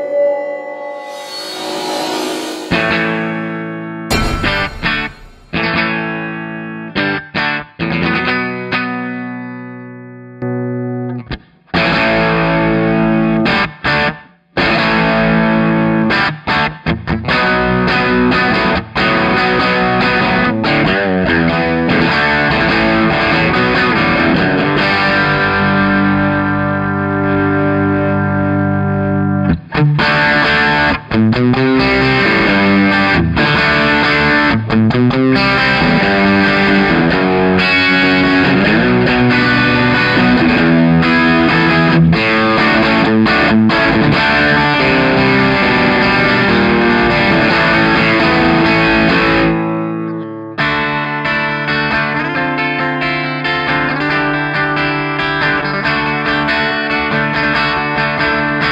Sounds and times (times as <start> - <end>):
Distortion: 0.0 - 58.7
Electric guitar: 0.0 - 58.7.